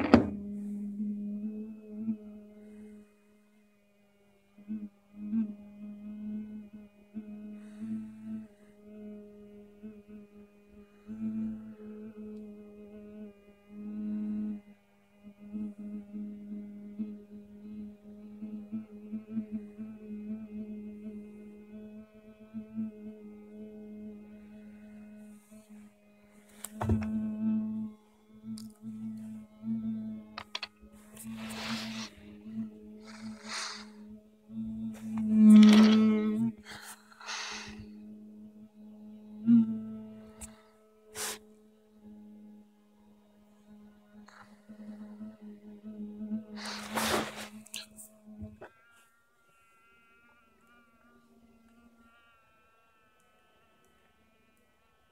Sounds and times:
Vibration: 0.0s - 1.3s, 26.6s - 41.4s.

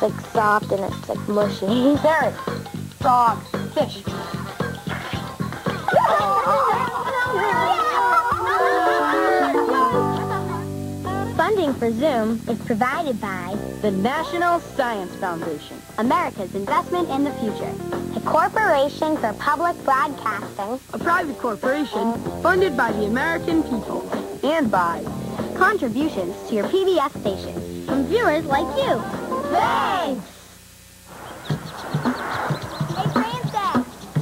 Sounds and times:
Speech: 0.0s - 2.4s, 3.0s - 4.1s, 11.3s - 30.3s, 32.9s - 33.9s
Music: 0.0s - 30.4s, 31.5s - 34.2s.

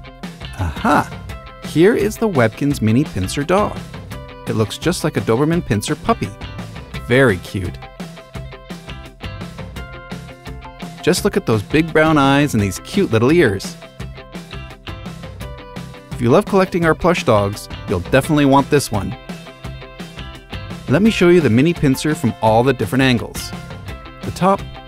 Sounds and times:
Music: 0.0s - 24.8s
Speech: 0.6s - 3.8s, 4.5s - 6.4s, 7.0s - 7.8s, 11.0s - 13.8s, 16.2s - 19.2s, 20.9s - 23.5s, 24.3s - 24.6s.

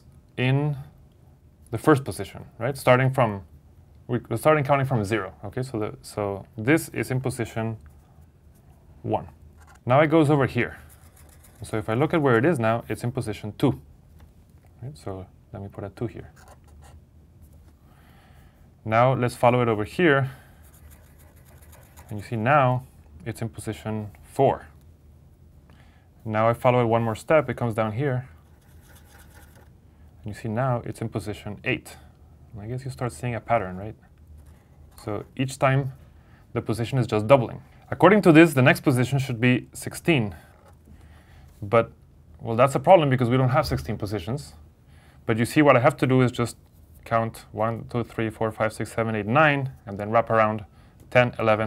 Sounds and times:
Speech: 0.0s - 1.0s, 1.7s - 3.5s, 4.1s - 7.8s, 9.0s - 10.8s, 11.6s - 13.9s, 14.8s - 16.4s, 18.8s - 20.4s, 22.0s - 24.8s, 26.3s - 28.4s, 30.2s - 34.0s, 35.0s - 40.4s, 41.6s - 44.6s, 45.3s - 51.6s.

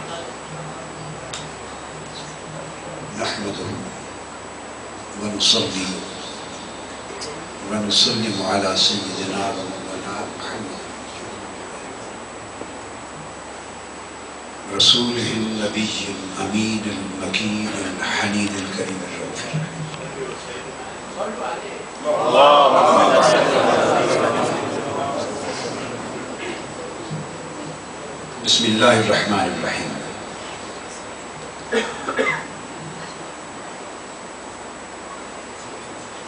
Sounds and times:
Male speech, man speaking: 2.8s - 4.0s, 5.2s - 6.4s, 7.1s - 12.1s, 14.7s - 26.0s, 28.4s - 30.2s.

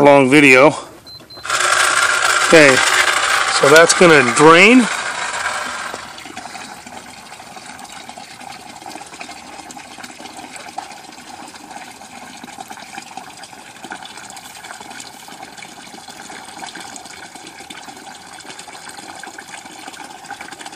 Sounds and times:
Water: 3.6s - 20.7s.

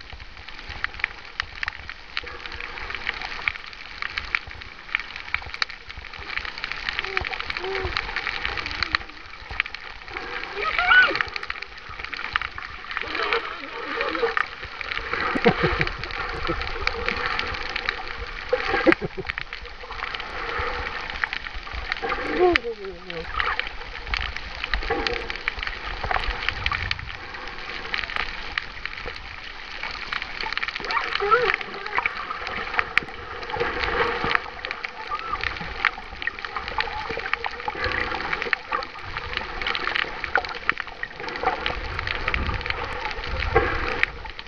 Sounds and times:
Splash, splatter: 2.2s - 44.4s.

